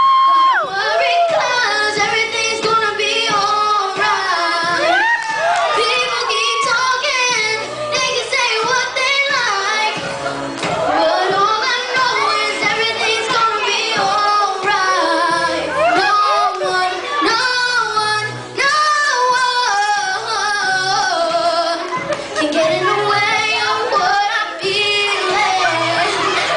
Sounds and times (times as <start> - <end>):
Music: 0.0 - 26.5
Child singing: 0.3 - 5.0, 5.6 - 26.5.